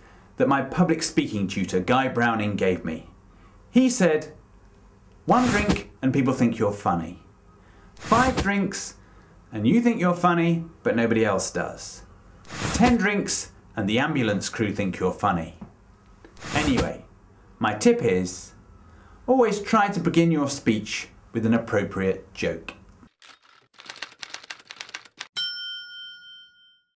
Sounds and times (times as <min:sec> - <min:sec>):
Narration, monologue: 0:00.0 - 0:23.1
Male speech, man speaking: 0:00.4 - 0:03.1, 0:03.8 - 0:04.4, 0:05.3 - 0:07.2, 0:08.0 - 0:09.0, 0:09.6 - 0:12.1, 0:12.8 - 0:15.6, 0:16.5 - 0:18.6, 0:19.3 - 0:22.8.